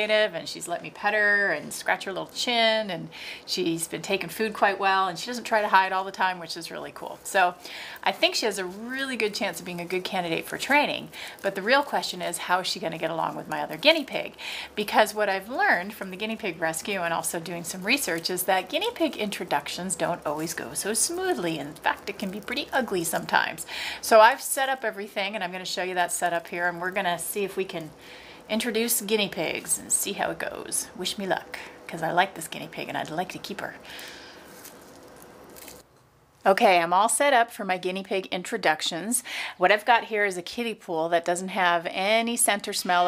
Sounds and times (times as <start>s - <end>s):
Speech: 0.0s - 33.8s, 36.5s - 43.0s.